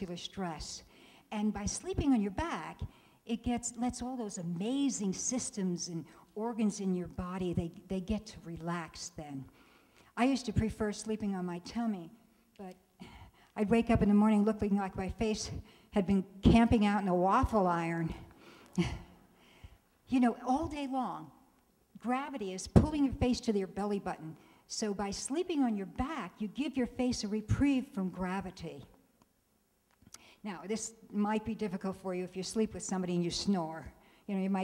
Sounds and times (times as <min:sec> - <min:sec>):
Speech: 0:00.0 - 0:09.5, 0:10.2 - 0:12.8, 0:13.6 - 0:18.2, 0:20.1 - 0:21.3, 0:22.0 - 0:28.9, 0:30.4 - 0:34.6.